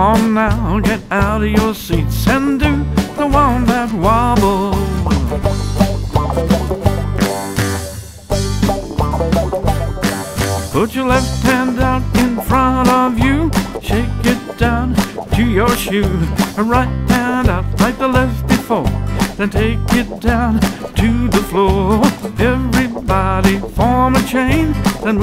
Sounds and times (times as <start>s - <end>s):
Music: 0.0s - 25.2s.